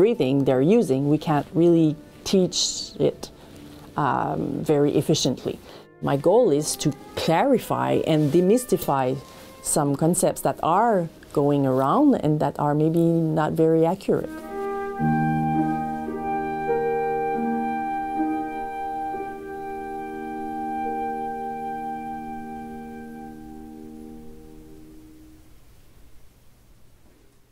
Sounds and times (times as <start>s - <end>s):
Classical music: 0.0s - 12.0s, 13.9s - 25.3s
Flute: 14.3s - 24.2s.